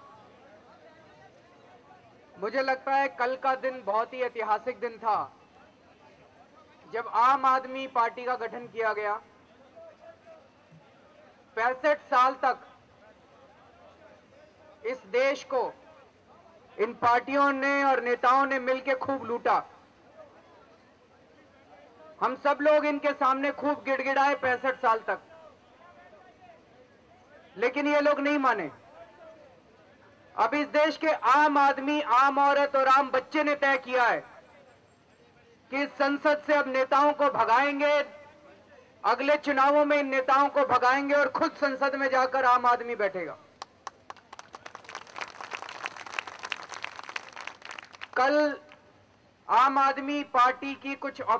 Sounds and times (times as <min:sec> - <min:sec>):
Male speech, man speaking: 0:00.0 - 0:43.5, 0:48.2 - 0:48.7, 0:49.5 - 0:51.3
Narration, monologue: 0:00.0 - 0:51.3.